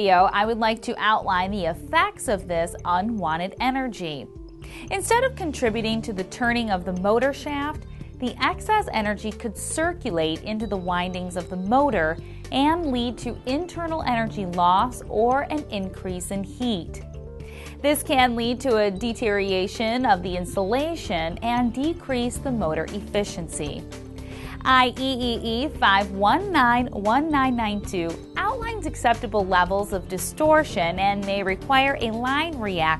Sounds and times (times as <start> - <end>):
Speech: 0.0 - 17.0, 17.8 - 23.8, 24.5 - 32.9
Music: 0.0 - 32.9.